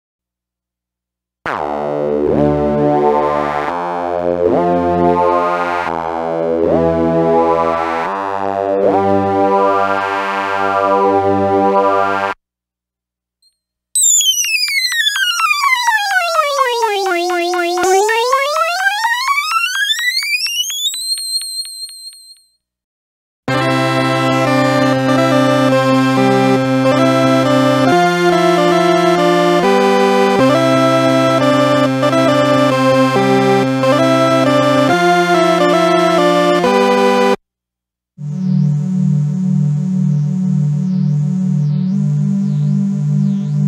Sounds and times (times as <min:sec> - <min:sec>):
Synthesizer: 0:01.5 - 0:12.4, 0:14.0 - 0:20.9, 0:23.5 - 0:37.4, 0:38.2 - 0:43.6.